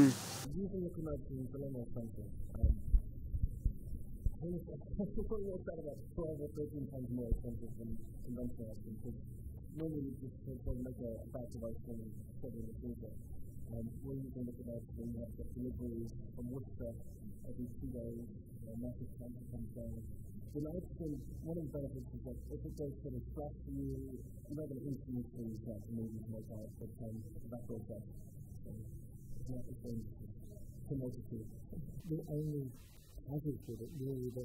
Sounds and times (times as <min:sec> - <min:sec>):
Speech: 0:00.0 - 0:03.0, 0:04.4 - 0:34.4.